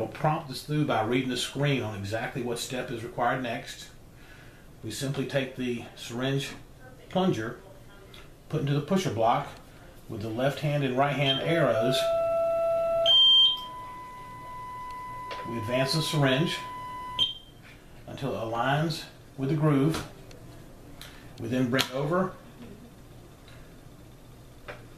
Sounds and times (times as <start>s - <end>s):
Speech: 0.0s - 4.0s, 4.8s - 12.1s, 15.5s - 16.7s, 18.1s - 20.8s, 21.4s - 22.8s.